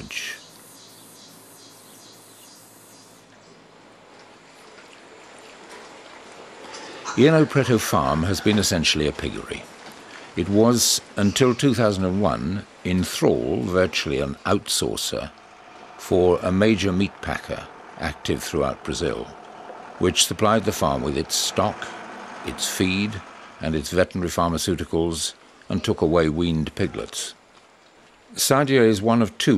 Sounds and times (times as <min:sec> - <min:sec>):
Speech: 0:00.0 - 0:00.4, 0:07.1 - 0:09.7, 0:10.4 - 0:15.3, 0:16.0 - 0:19.4, 0:20.0 - 0:27.4, 0:28.3 - 0:29.5.